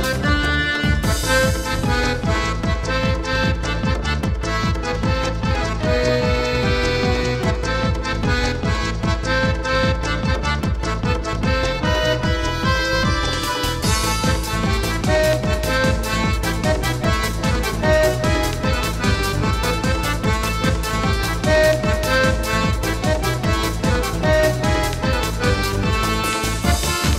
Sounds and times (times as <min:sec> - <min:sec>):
House music: 0:00.0 - 0:27.1.